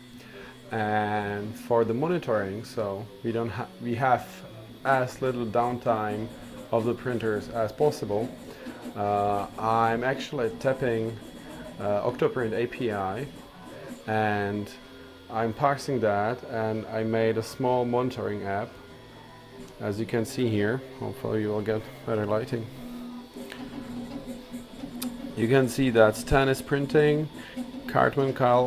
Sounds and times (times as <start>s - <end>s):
Speech: 0.6s - 8.4s, 9.0s - 18.7s, 19.8s - 22.8s, 25.4s - 27.3s, 27.9s - 28.6s.